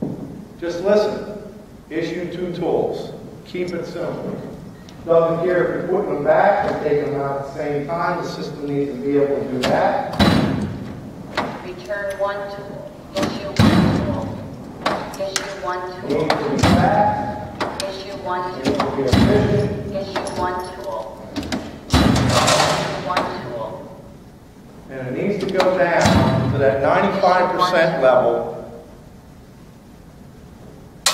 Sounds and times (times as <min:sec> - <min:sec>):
Speech: 0:01.9 - 0:04.5, 0:05.1 - 0:10.2, 0:11.7 - 0:14.4, 0:15.2 - 0:21.2, 0:22.4 - 0:24.0, 0:24.9 - 0:28.6.